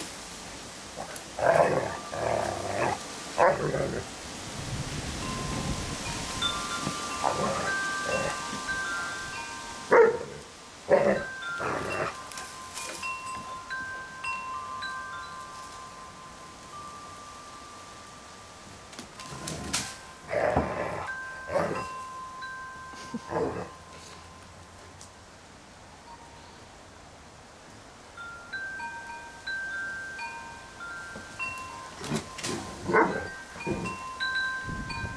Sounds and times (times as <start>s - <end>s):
Wind chime: 1.6s - 3.2s, 4.8s - 25.3s, 26.0s - 26.9s, 28.1s - 35.1s.